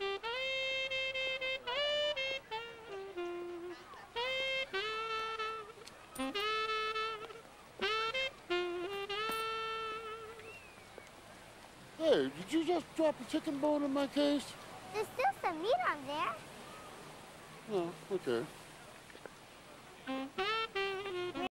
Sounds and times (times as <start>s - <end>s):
Music: 0.0s - 10.4s, 20.1s - 21.5s.